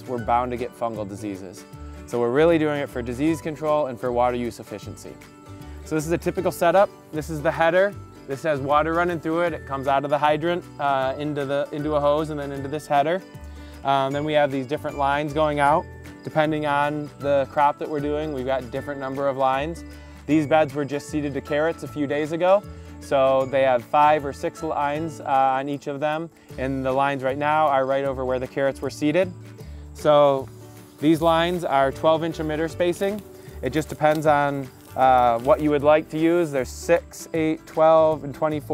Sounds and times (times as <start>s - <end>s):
Speech: 0.0s - 5.2s, 5.9s - 13.2s, 13.8s - 29.3s, 30.0s - 38.7s
Music: 0.0s - 38.7s.